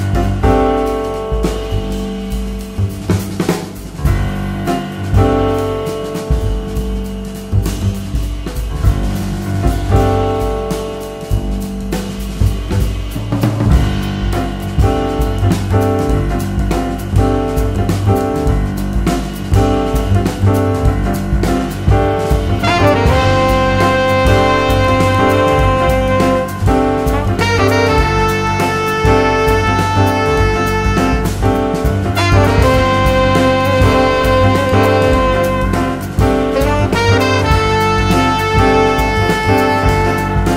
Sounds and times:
Music: 0:00.0 - 0:40.5.

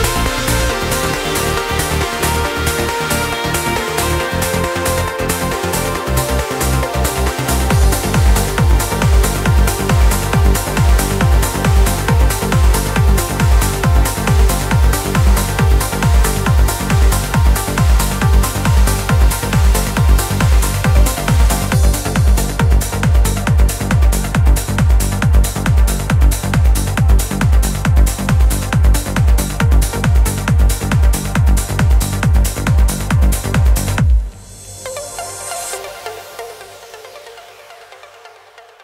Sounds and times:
Trance music: 0:00.0 - 0:38.8.

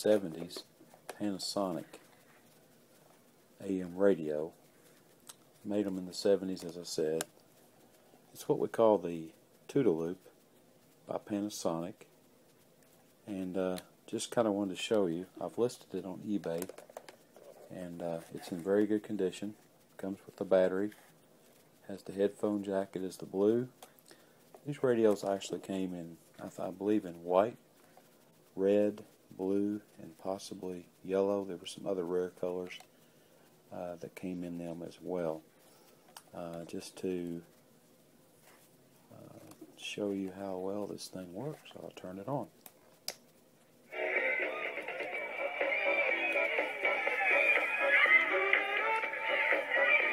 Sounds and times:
Speech: 0:00.0 - 0:02.0, 0:03.6 - 0:04.6, 0:05.6 - 0:07.3, 0:08.3 - 0:10.3, 0:11.0 - 0:12.1, 0:13.2 - 0:16.7, 0:17.7 - 0:21.0, 0:21.8 - 0:23.8, 0:24.6 - 0:27.6, 0:28.6 - 0:32.9, 0:33.7 - 0:35.5, 0:36.3 - 0:37.5, 0:39.1 - 0:42.6.

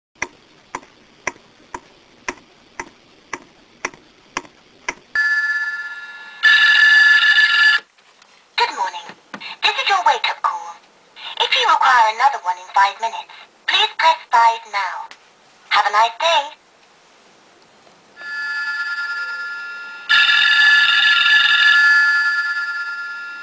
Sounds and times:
Speech: 0:08.6 - 0:15.1, 0:15.7 - 0:16.6.

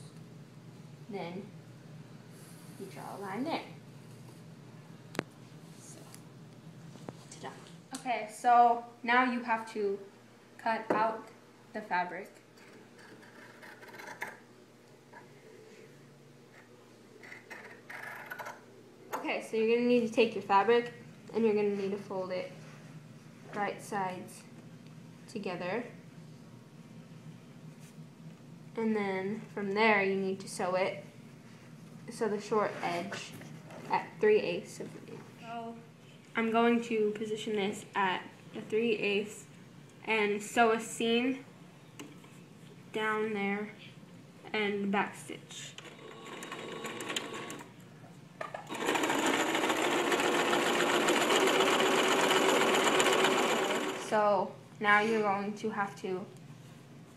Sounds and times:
Inside, small room: 0:00.0 - 0:57.1
Speech: 0:01.1 - 0:01.5, 0:02.8 - 0:03.8, 0:07.3 - 0:12.4, 0:19.2 - 0:22.6, 0:23.5 - 0:24.5, 0:25.3 - 0:26.0, 0:28.8 - 0:31.1, 0:32.1 - 0:41.5, 0:42.9 - 0:45.8, 0:54.1 - 0:56.4
Sewing machine: 0:45.8 - 0:47.7, 0:48.7 - 0:54.1.

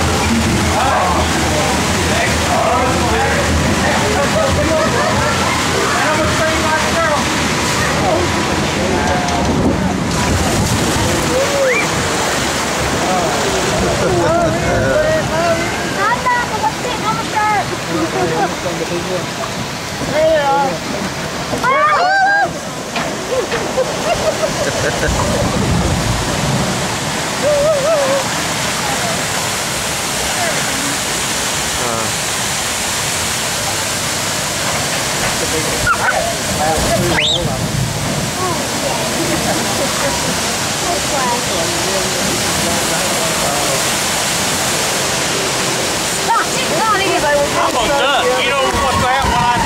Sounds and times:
Water: 0:00.0 - 0:49.6.

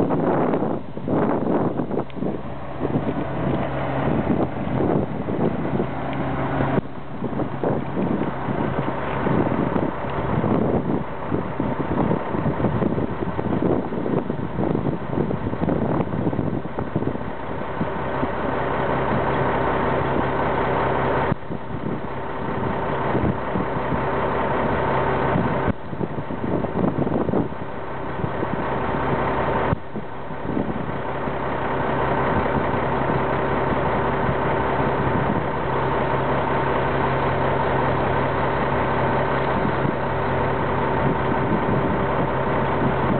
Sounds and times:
Vehicle: 0:00.0 - 0:43.1.

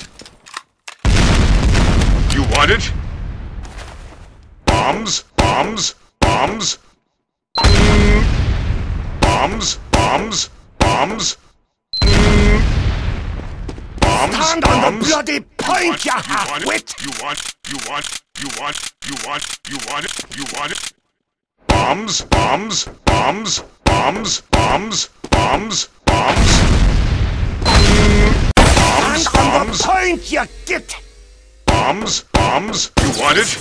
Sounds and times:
Speech: 0:02.3 - 0:03.0, 0:14.0 - 0:20.8, 0:28.8 - 0:31.0, 0:31.7 - 0:33.6.

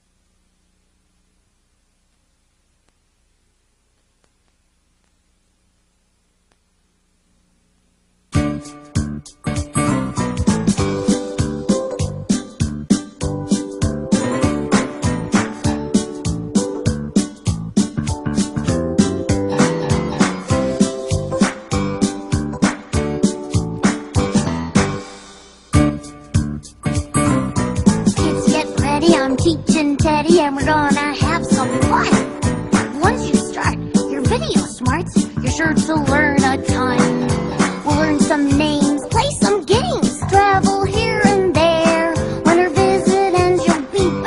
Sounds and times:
Music: 0:08.3 - 0:44.2.

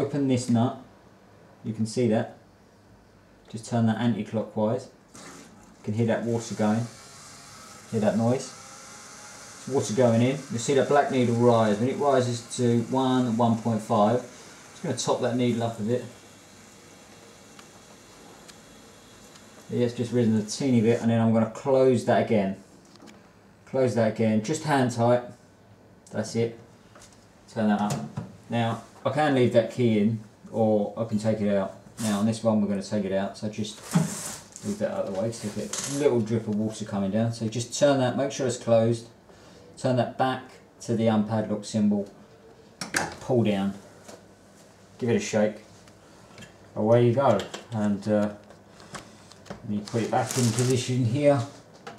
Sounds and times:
Speech: 0:00.0 - 0:00.9, 0:01.6 - 0:02.4, 0:03.5 - 0:05.0, 0:05.8 - 0:07.0, 0:07.9 - 0:08.6, 0:09.6 - 0:16.2, 0:19.7 - 0:22.6, 0:23.7 - 0:25.4, 0:26.1 - 0:26.6, 0:27.5 - 0:33.9, 0:34.6 - 0:39.2, 0:39.8 - 0:42.2, 0:43.0 - 0:43.8, 0:45.0 - 0:45.7, 0:46.8 - 0:48.4, 0:49.6 - 0:51.6.

